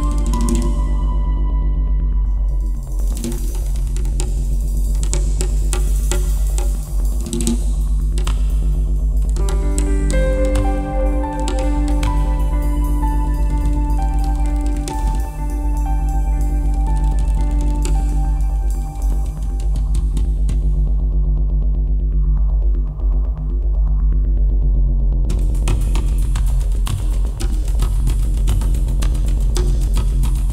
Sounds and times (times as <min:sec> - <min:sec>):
New-age music: 0:00.0 - 0:05.7, 0:08.7 - 0:21.2.